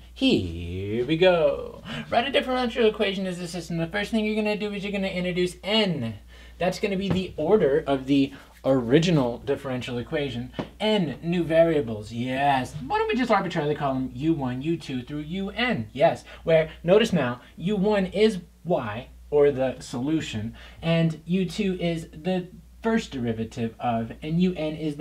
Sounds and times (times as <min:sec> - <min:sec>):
Speech: 0:00.0 - 0:25.0.